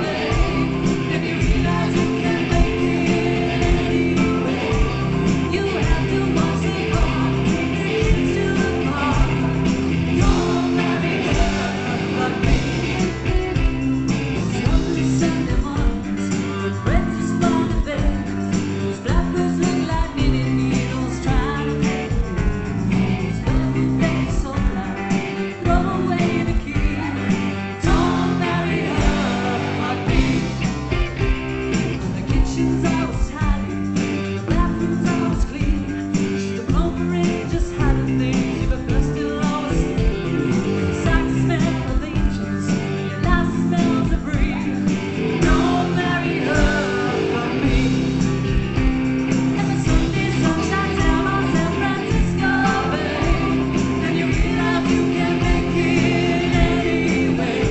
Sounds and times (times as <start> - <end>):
Psychedelic rock: 0.0 - 57.7.